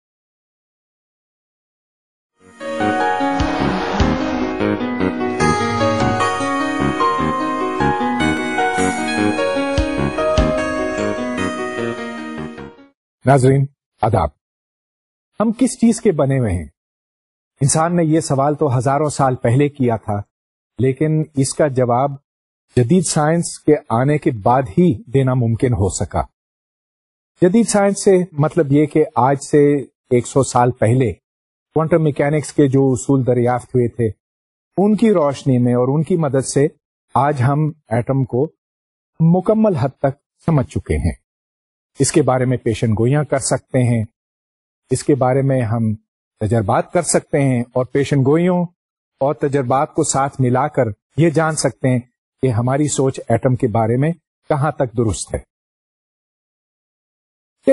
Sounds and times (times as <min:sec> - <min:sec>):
Music: 0:02.3 - 0:13.0
Speech: 0:13.2 - 0:14.4, 0:15.4 - 0:16.8, 0:17.6 - 0:22.2, 0:22.8 - 0:26.3, 0:27.4 - 0:31.2, 0:31.8 - 0:34.2, 0:34.8 - 0:38.6, 0:39.2 - 0:41.2, 0:42.0 - 0:44.2, 0:44.9 - 0:55.5.